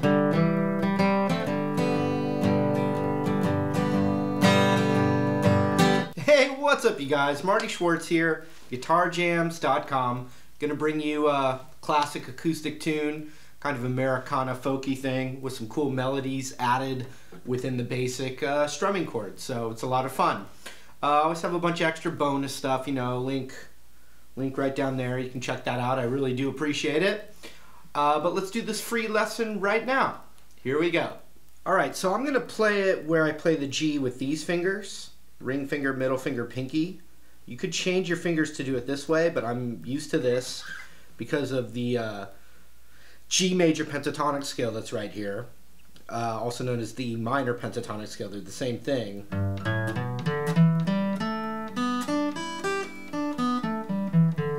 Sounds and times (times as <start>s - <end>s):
Acoustic guitar: 0.0s - 6.8s, 49.2s - 54.5s
Speech: 6.2s - 23.8s, 24.4s - 27.3s, 27.9s - 42.4s, 43.3s - 49.3s.